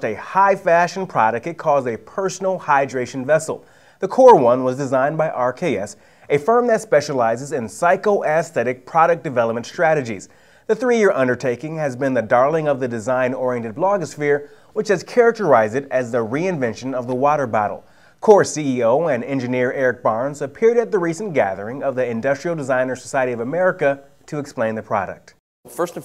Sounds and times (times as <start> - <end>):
Speech: 0.0 - 26.0.